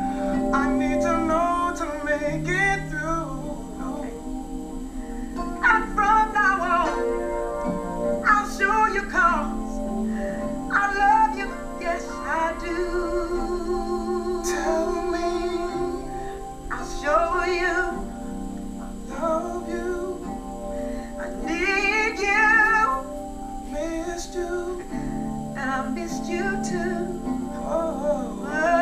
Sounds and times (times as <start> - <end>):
Singing: 0.0 - 4.3, 8.2 - 20.6, 21.2 - 28.8
Inside, small room: 0.0 - 28.8
Music: 0.0 - 28.8.